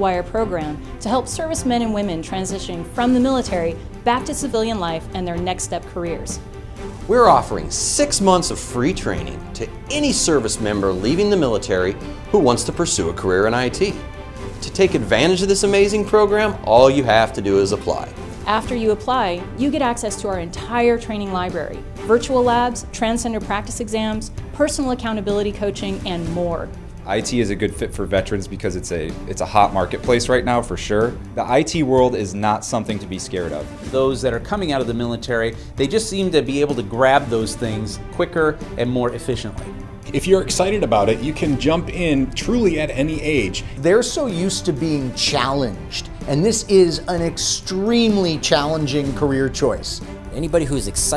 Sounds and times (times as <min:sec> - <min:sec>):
Music: 0:00.0 - 0:51.1
Speech: 0:07.1 - 0:14.0, 0:14.6 - 0:51.1.